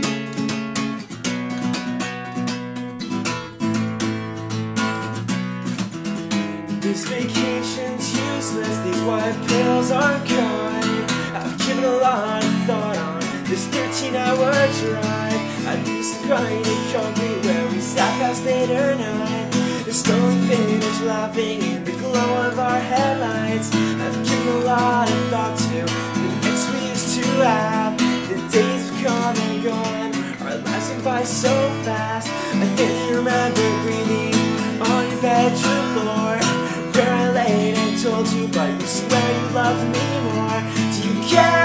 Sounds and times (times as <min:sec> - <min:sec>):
Acoustic guitar: 0:00.0 - 0:41.6
Strum: 0:00.0 - 0:41.6.